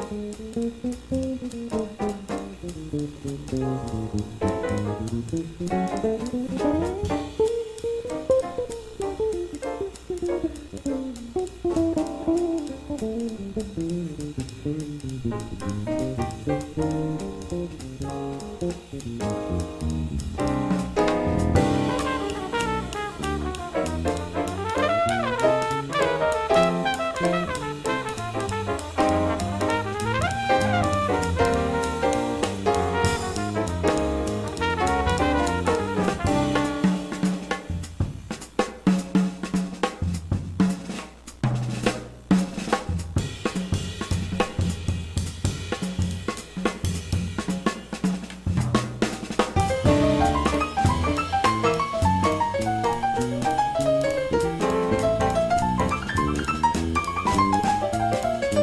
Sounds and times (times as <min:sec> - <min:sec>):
Bass drum: 0:00.0 - 0:58.6
Drum kit: 0:00.0 - 0:58.6
Hi-hat: 0:00.0 - 0:58.6
Rimshot: 0:00.0 - 0:58.6.